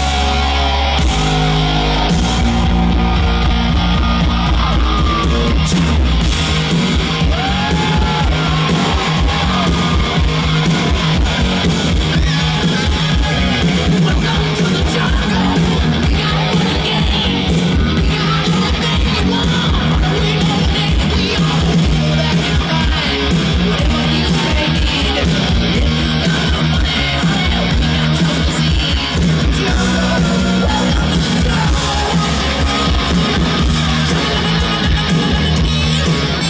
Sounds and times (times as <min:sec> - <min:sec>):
Pop music: 0:00.0 - 0:36.5.